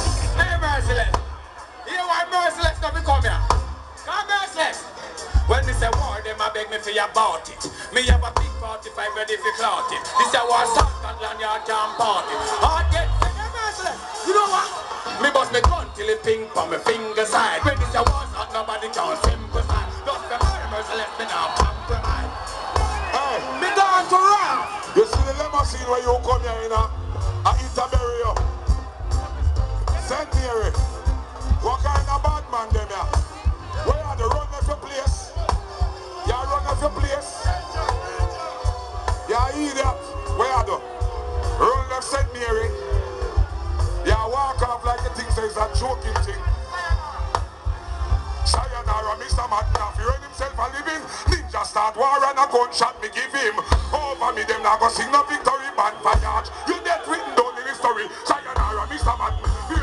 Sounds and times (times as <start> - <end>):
Speech: 0.0 - 1.2, 1.8 - 22.3, 23.1 - 28.5, 29.9 - 30.9, 31.5 - 35.5, 36.2 - 40.8, 41.6 - 43.0, 44.0 - 47.3, 48.4 - 59.8
Music: 0.0 - 59.8.